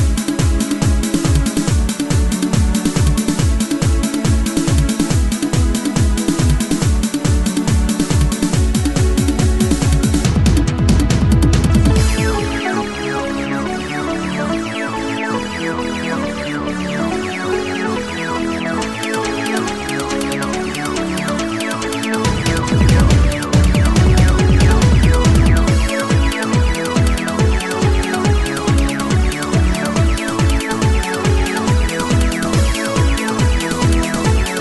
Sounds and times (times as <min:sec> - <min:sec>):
Techno: 0:00.0 - 0:34.6.